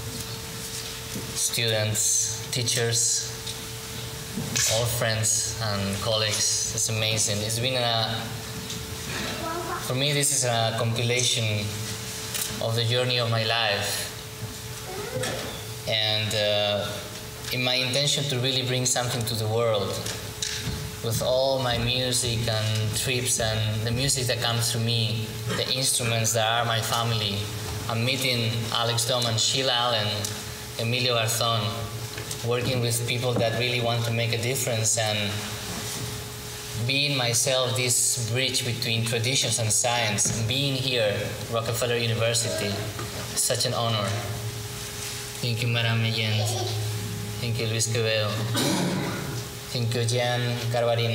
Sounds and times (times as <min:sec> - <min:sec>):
Speech: 0:01.4 - 0:03.4, 0:04.6 - 0:08.4, 0:09.4 - 0:11.8, 0:12.6 - 0:14.2, 0:15.3 - 0:20.2, 0:21.0 - 0:35.6, 0:36.8 - 0:44.4, 0:45.4 - 0:48.8, 0:49.7 - 0:51.1.